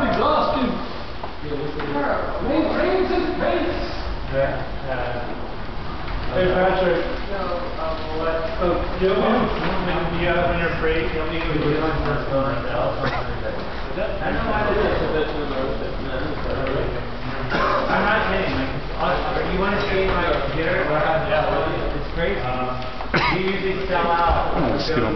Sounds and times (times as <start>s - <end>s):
Speech: 0.0s - 5.4s, 6.3s - 25.1s.